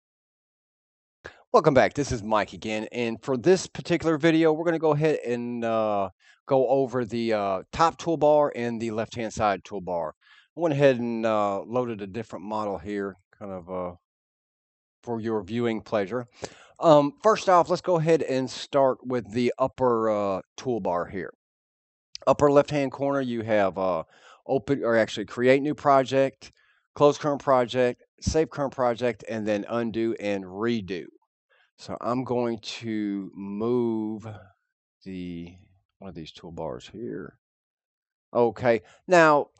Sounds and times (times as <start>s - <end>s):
Speech: 1.3s - 14.0s, 15.1s - 21.3s, 22.2s - 31.1s, 31.8s - 34.4s, 35.1s - 37.3s, 38.4s - 39.5s.